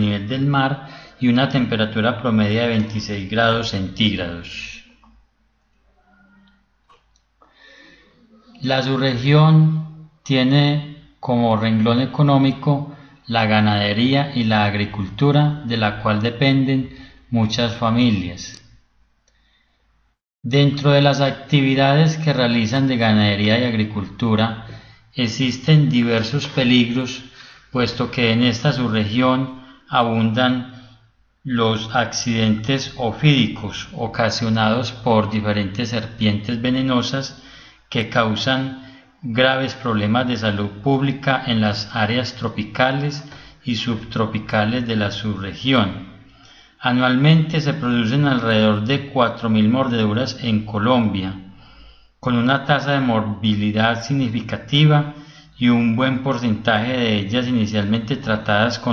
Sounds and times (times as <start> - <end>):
Speech: 0.0 - 5.0, 8.1 - 18.6, 20.5 - 30.9, 31.5 - 46.2, 46.8 - 51.5, 52.2 - 58.9.